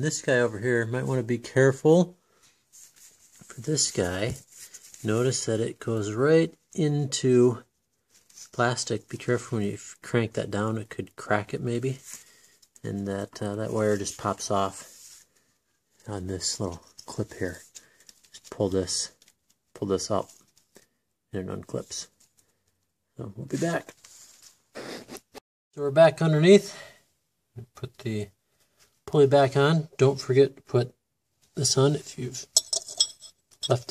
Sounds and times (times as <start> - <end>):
Speech: 0.0 - 2.2, 3.4 - 7.7, 8.5 - 12.0, 12.8 - 14.9, 16.0 - 17.7, 18.4 - 19.2, 19.8 - 20.4, 21.3 - 22.2, 23.2 - 24.0, 25.8 - 27.0, 27.6 - 28.4, 29.1 - 31.0, 31.6 - 32.6, 33.7 - 33.9.